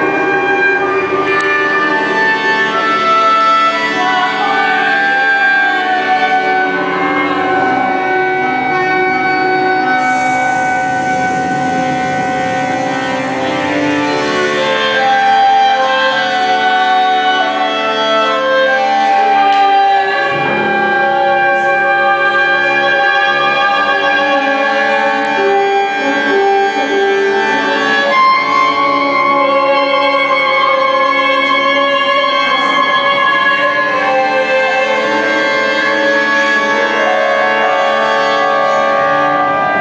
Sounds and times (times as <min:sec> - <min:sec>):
Classical music: 0:00.0 - 0:39.8.